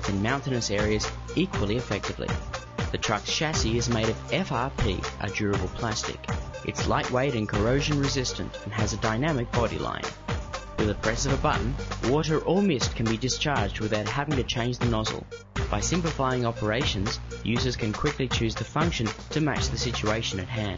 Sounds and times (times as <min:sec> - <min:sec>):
Speech: 0:00.0 - 0:10.2, 0:10.8 - 0:20.7
Music: 0:00.0 - 0:20.7.